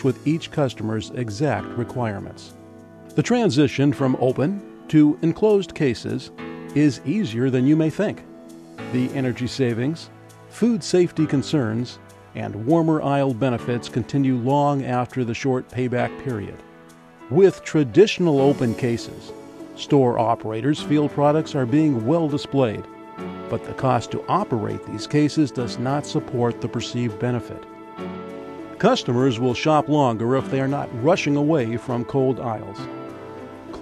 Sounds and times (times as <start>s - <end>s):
Speech: 0.0s - 2.6s, 3.2s - 8.2s, 8.9s - 16.6s, 17.3s - 22.9s, 23.5s - 27.7s, 28.8s - 32.9s
Music: 0.0s - 33.8s.